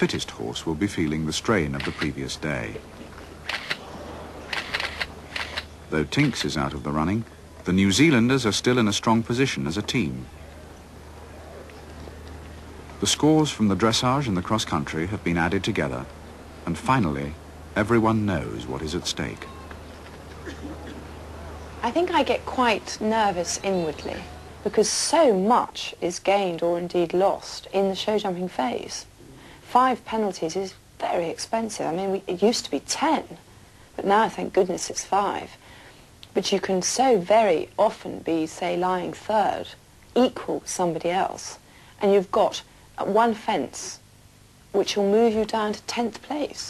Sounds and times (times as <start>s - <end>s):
Speech: 0.0s - 2.8s, 5.9s - 10.6s, 16.7s - 19.5s, 21.8s - 29.1s, 29.7s - 33.4s, 34.0s - 35.6s, 36.4s - 44.0s, 44.8s - 46.7s.